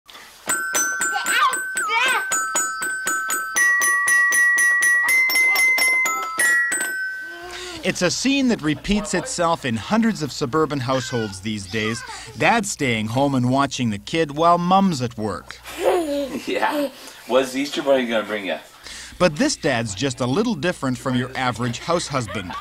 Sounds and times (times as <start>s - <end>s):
Music: 0.5s - 7.7s
Speech: 7.9s - 15.5s, 17.3s - 22.6s.